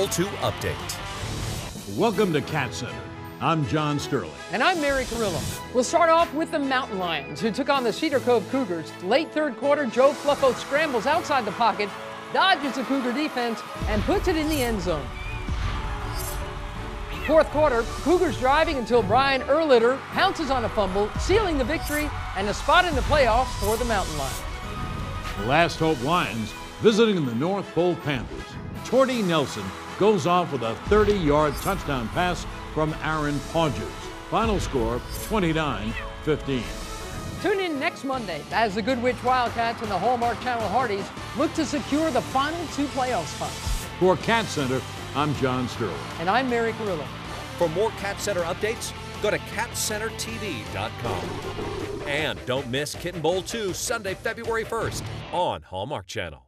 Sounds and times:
Music: 0.0s - 56.4s.

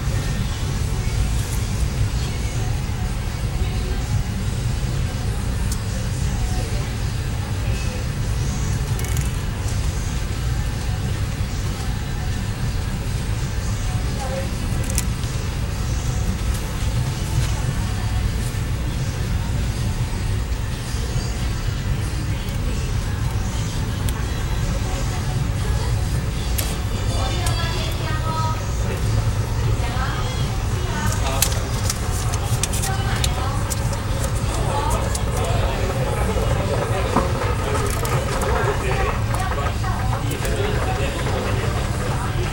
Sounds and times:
Speech: 13.5s - 19.7s, 20.9s - 42.5s.

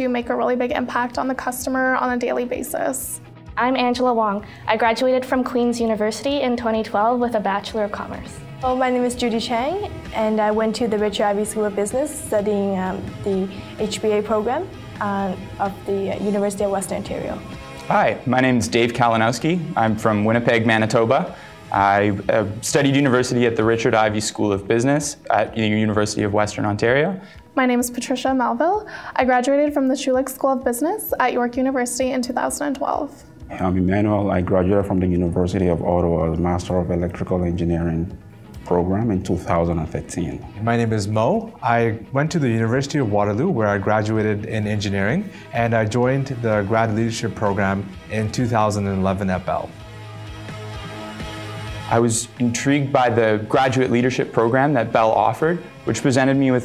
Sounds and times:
Music: 0.0s - 56.6s
Speech: 17.9s - 21.2s, 21.8s - 38.1s, 38.7s - 49.7s, 51.9s - 56.6s.

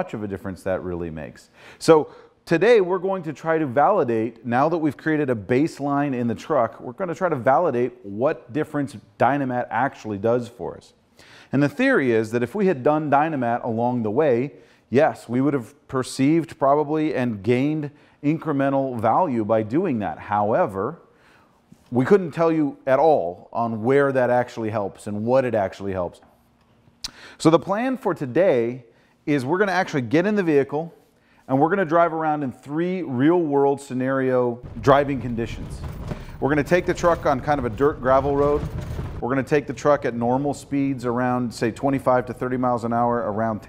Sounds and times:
Speech: 0.0s - 21.0s, 21.9s - 26.2s, 27.4s - 35.8s, 36.4s - 43.6s.

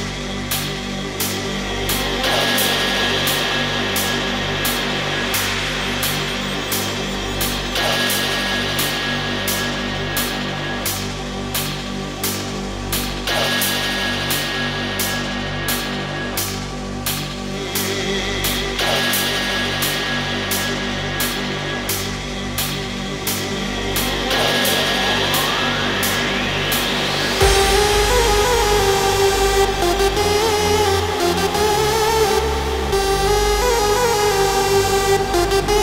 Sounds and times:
Music: 0.0s - 35.8s.

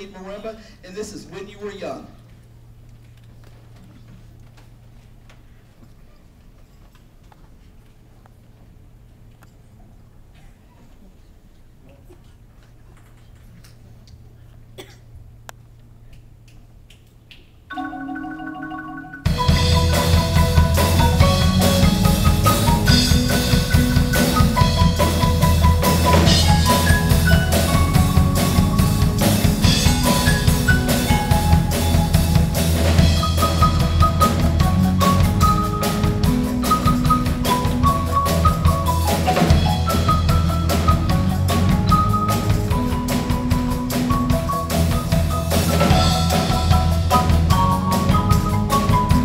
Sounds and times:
Percussion: 16.4s - 49.2s.

